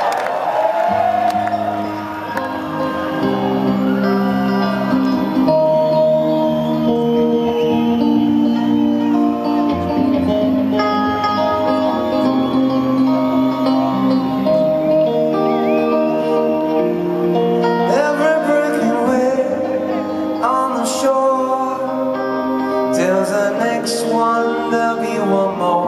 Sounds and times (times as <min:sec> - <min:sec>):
Music: 0:00.1 - 0:25.8.